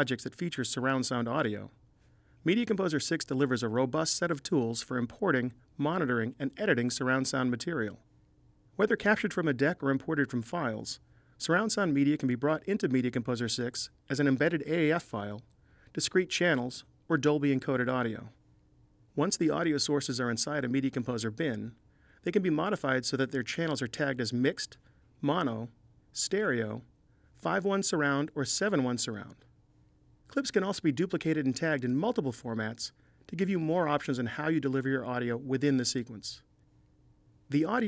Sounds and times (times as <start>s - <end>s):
Speech: 0.0s - 1.8s, 2.4s - 8.0s, 8.8s - 18.4s, 19.2s - 29.5s, 30.3s - 36.5s, 37.5s - 37.8s.